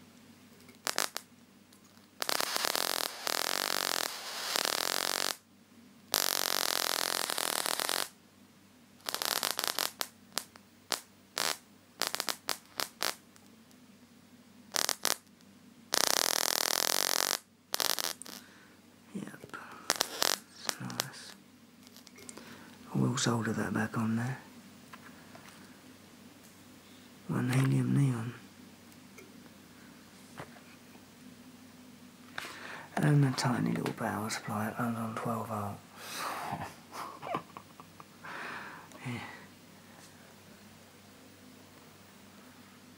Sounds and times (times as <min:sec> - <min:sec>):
Inside, small room: 0:00.0 - 0:42.9
Speech: 0:19.1 - 0:19.6, 0:20.5 - 0:21.4, 0:22.9 - 0:24.5, 0:27.3 - 0:28.4, 0:32.9 - 0:35.8, 0:39.0 - 0:39.4.